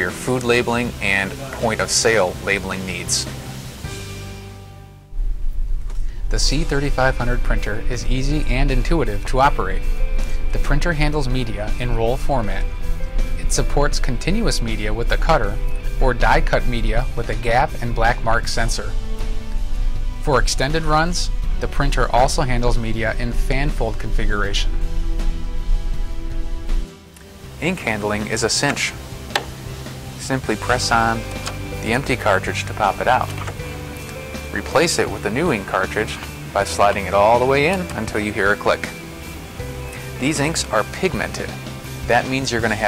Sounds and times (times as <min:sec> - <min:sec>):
Speech: 0:00.0 - 0:03.3, 0:06.3 - 0:09.8, 0:10.5 - 0:12.7, 0:13.4 - 0:19.0, 0:20.2 - 0:24.7, 0:27.6 - 0:29.0, 0:30.2 - 0:33.4, 0:34.5 - 0:38.9, 0:40.2 - 0:42.8
Music: 0:00.0 - 0:42.8.